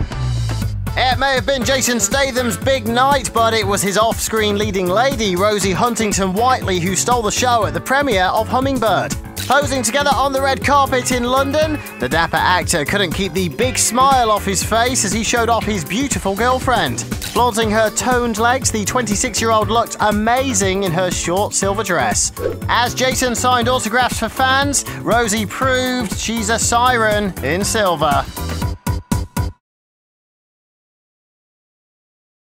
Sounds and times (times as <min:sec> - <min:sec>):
Music: 0:00.0 - 0:29.6
Speech: 0:01.0 - 0:28.4.